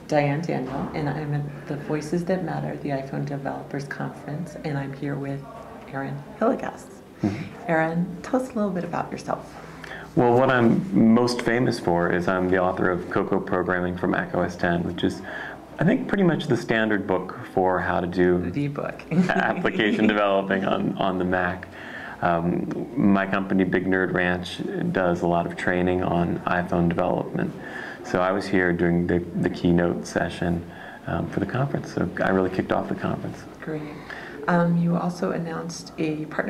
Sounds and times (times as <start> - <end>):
Speech: 10.1 - 36.5.